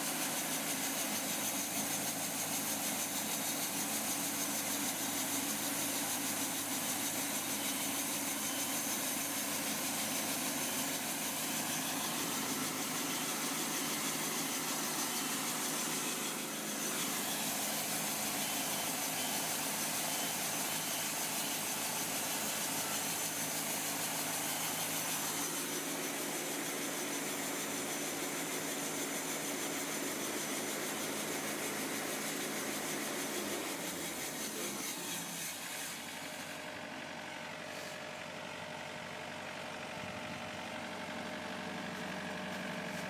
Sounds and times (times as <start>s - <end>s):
Sawing: 0.0s - 38.3s, 40.3s - 43.1s.